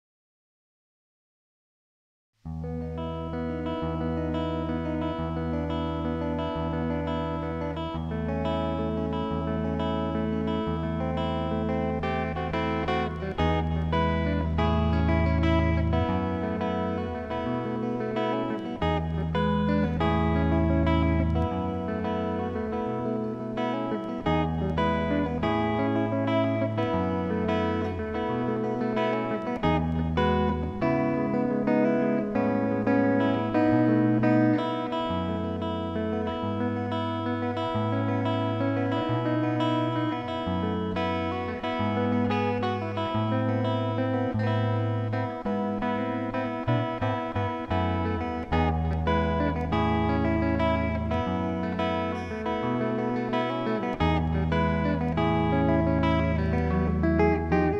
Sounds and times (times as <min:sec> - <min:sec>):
Electric guitar: 0:02.5 - 0:57.7.